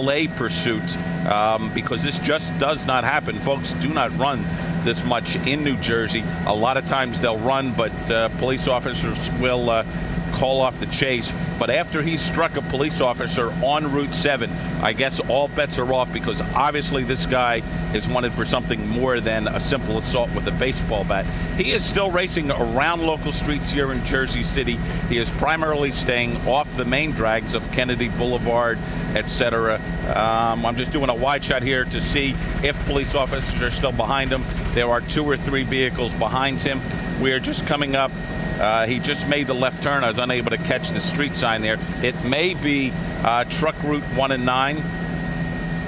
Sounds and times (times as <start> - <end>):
Speech: 0.0 - 45.0.